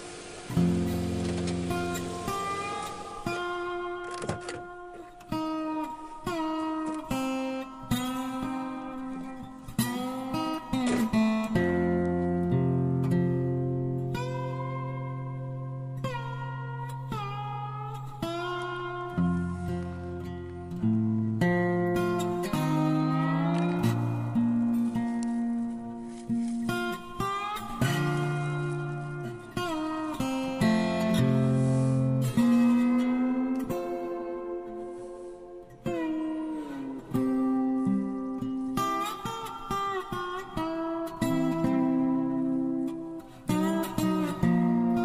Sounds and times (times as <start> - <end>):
Music: 0.0 - 45.0.